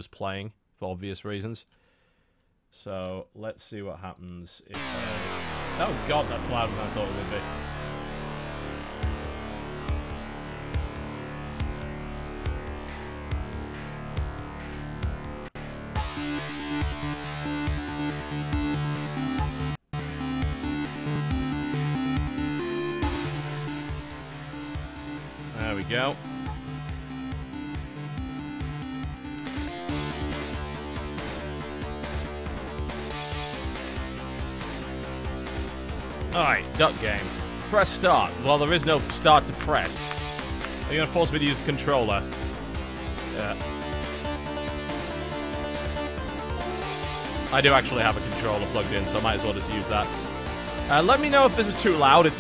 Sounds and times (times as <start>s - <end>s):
Music: 4.8s - 52.4s.